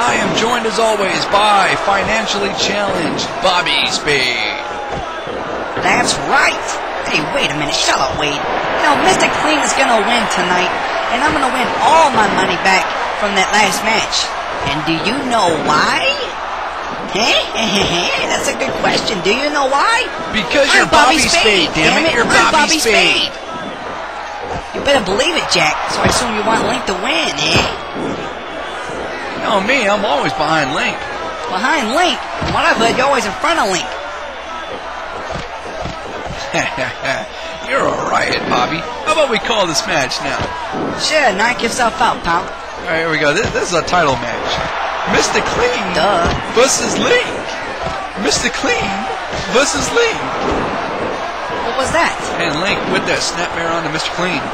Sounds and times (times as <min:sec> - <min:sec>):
Speech: 0:05.8 - 0:16.4, 0:17.1 - 0:23.4, 0:29.4 - 0:33.9.